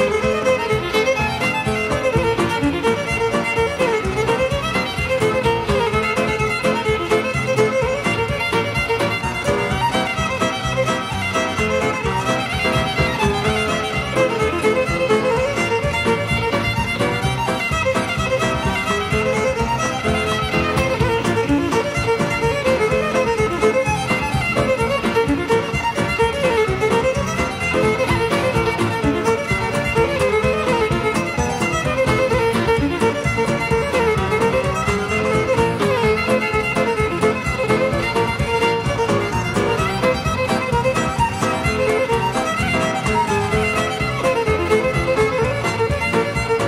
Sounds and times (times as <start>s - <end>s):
Violin, fiddle: 0.0s - 46.6s.